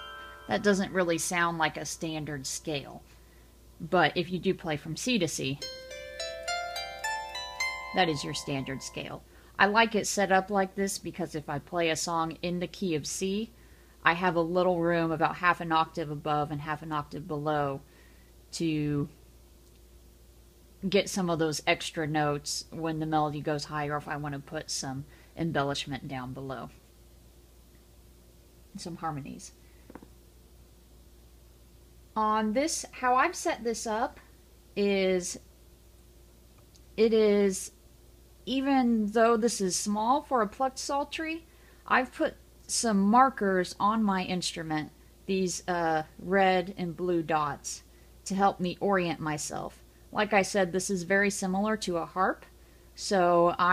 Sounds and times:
Zither: 0.0 - 1.8, 5.6 - 9.1.

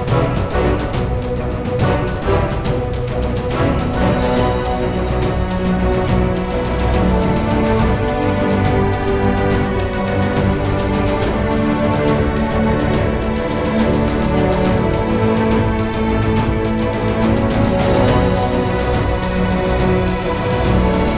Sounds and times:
Music: 0.0 - 21.1.

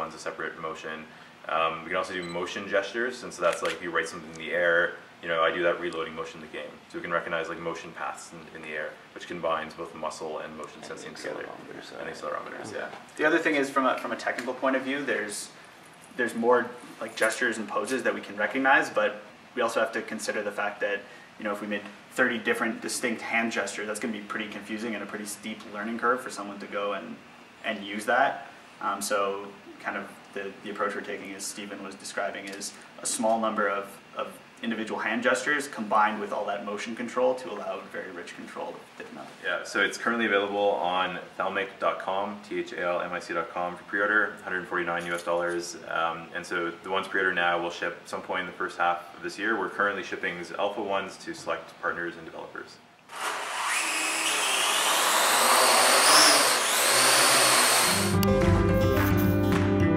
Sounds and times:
Speech: 0.0 - 15.6, 16.2 - 52.8.

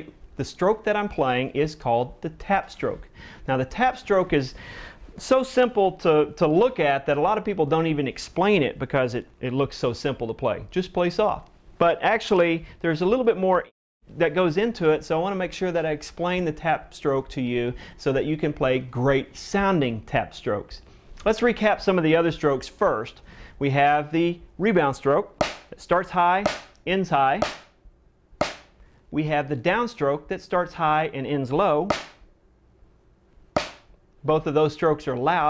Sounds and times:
Speech: 0.0 - 4.6, 5.2 - 27.4, 29.1 - 31.9, 34.2 - 35.5.

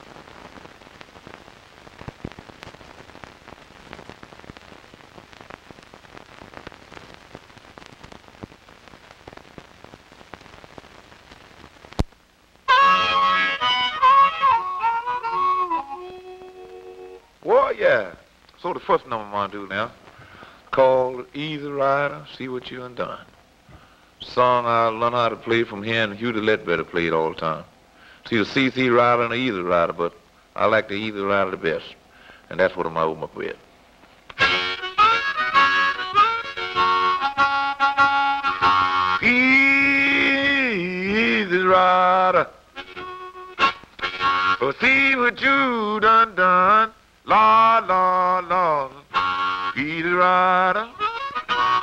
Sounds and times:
Harmonica: 12.7 - 17.3, 34.4 - 41.8, 42.8 - 45.2, 48.5 - 51.8
Speech: 17.4 - 20.0, 20.7 - 23.3, 24.2 - 27.7, 28.3 - 33.6.

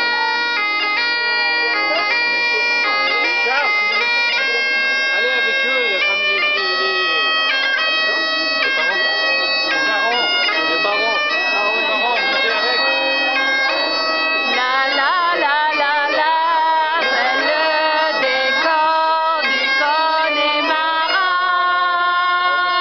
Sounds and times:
Bagpipes: 0.0 - 22.8
Speech: 1.2 - 22.8.

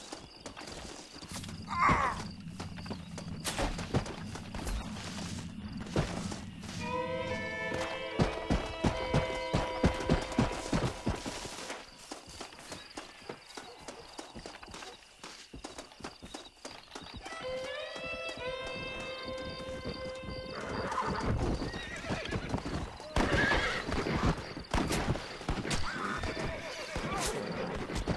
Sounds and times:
Music: 6.8 - 10.8, 17.2 - 21.0
Clip-clop: 7.4 - 28.1
Neigh, whinny: 17.2 - 24.5, 25.6 - 28.1.

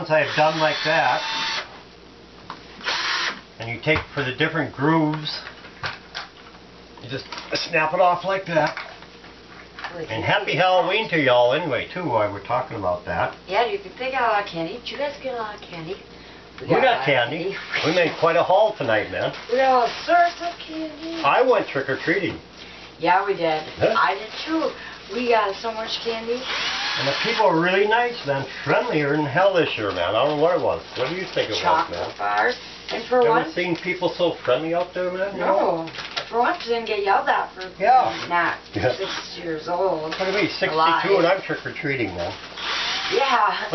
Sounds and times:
Drill: 0.2 - 1.7, 2.8 - 3.4, 17.6 - 18.2, 26.4 - 27.6, 38.0 - 38.4, 42.6 - 43.5.

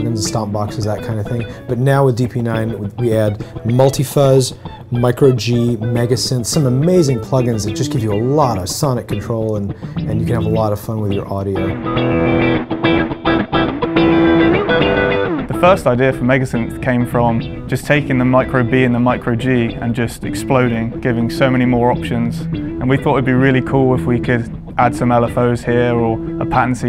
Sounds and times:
Speech: 0.0 - 11.8, 15.5 - 26.8
Electric guitar: 0.0 - 26.8.

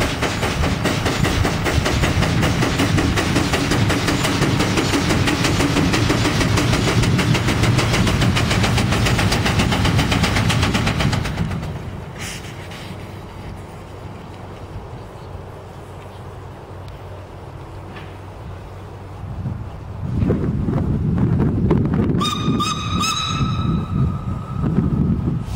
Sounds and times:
Hiss: 0.0 - 11.3, 12.1 - 14.2, 25.3 - 25.5.

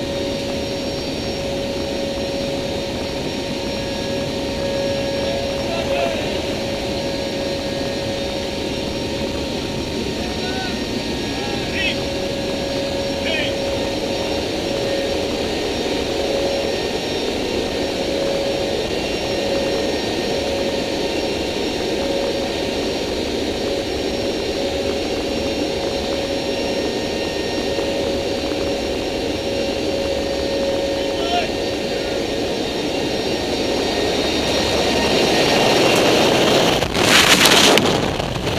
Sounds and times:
Speech: 5.6 - 6.4, 13.2 - 13.6, 31.0 - 31.6.

